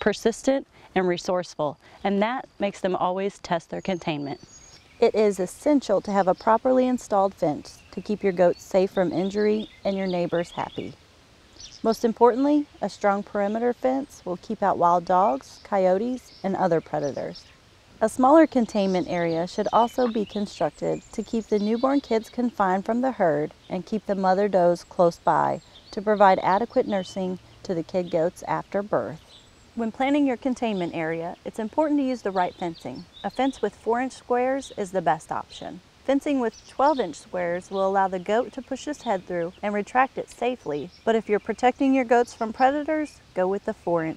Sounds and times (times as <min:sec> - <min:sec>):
Speech: 0:00.0 - 0:04.4, 0:05.0 - 0:11.0, 0:11.8 - 0:17.4, 0:18.0 - 0:29.2, 0:29.8 - 0:44.1.